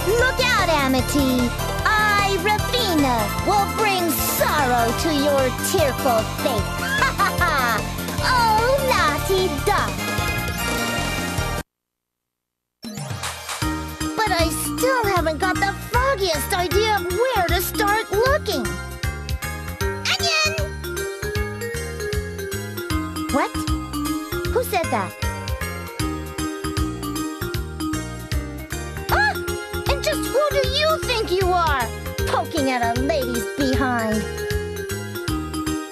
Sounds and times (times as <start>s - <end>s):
Speech: 0.0s - 6.6s, 14.2s - 18.7s, 24.5s - 25.2s, 29.1s - 34.3s
Music: 0.0s - 11.6s, 12.8s - 35.9s.